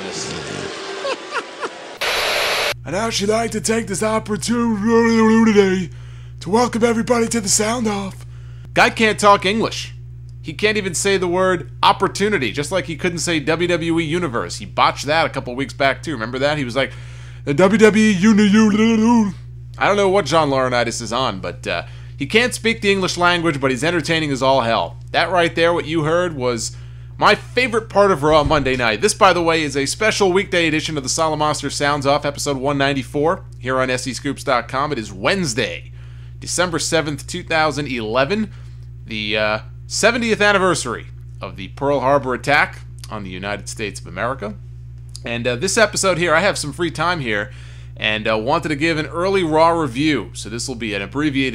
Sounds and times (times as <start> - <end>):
Speech: 0.0 - 0.7, 2.8 - 8.2, 8.8 - 38.5, 39.1 - 44.6, 45.2 - 51.5.